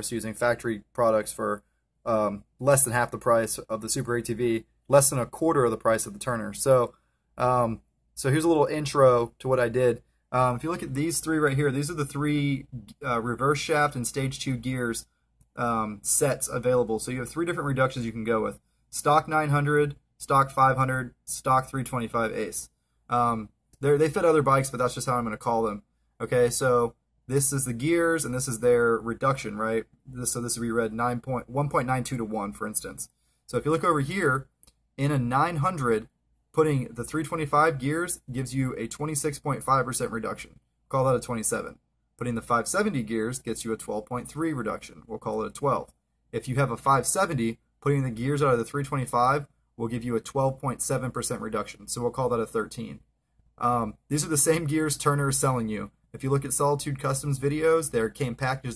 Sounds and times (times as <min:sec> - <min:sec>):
Speech: 0:00.0 - 0:53.0, 0:53.6 - 0:58.7.